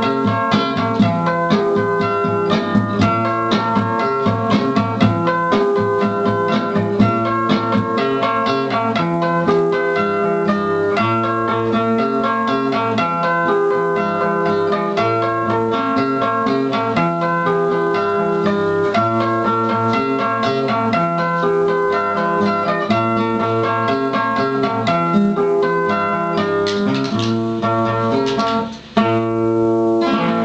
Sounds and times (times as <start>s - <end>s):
Guitar: 0.0s - 30.4s.